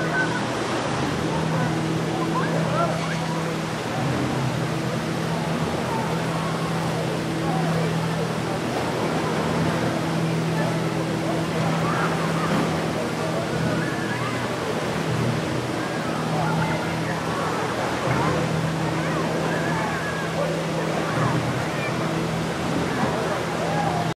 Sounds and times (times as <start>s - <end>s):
Speech: 0.0s - 24.1s
Waterfall: 0.0s - 24.1s.